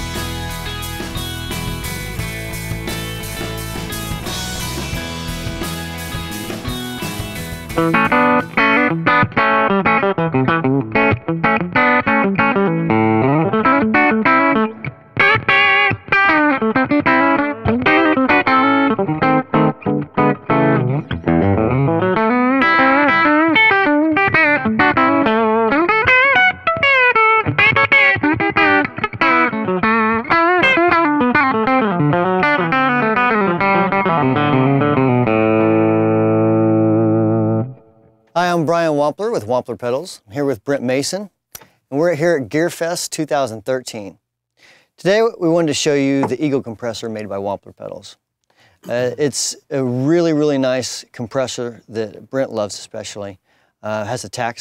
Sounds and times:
Music: 0.0s - 38.4s
Speech: 38.4s - 44.2s, 45.0s - 48.2s, 48.8s - 54.6s.

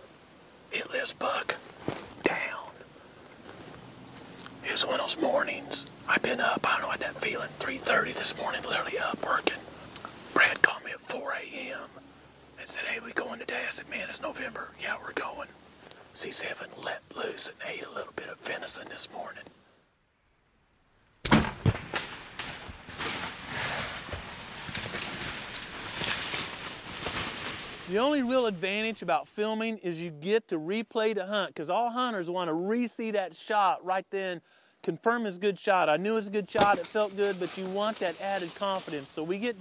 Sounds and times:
Speech: 4.6s - 9.6s, 10.4s - 12.0s, 12.6s - 15.5s, 27.9s - 39.6s.

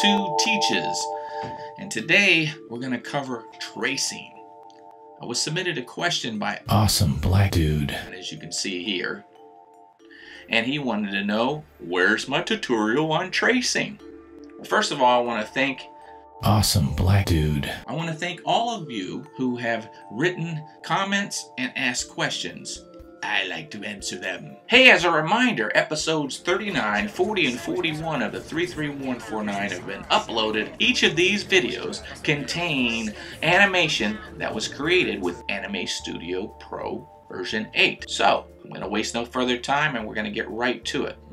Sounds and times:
Speech: 0.0s - 1.1s, 1.8s - 4.4s, 5.2s - 9.2s, 10.5s - 14.0s, 14.6s - 41.2s.

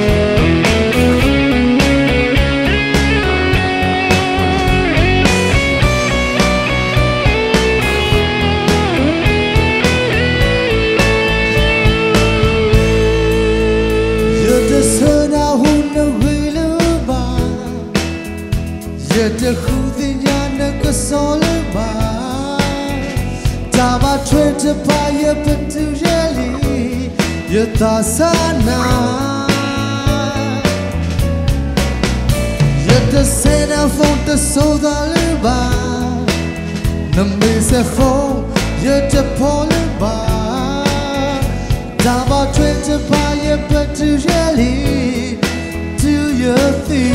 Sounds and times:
Music: 0.0s - 47.1s.

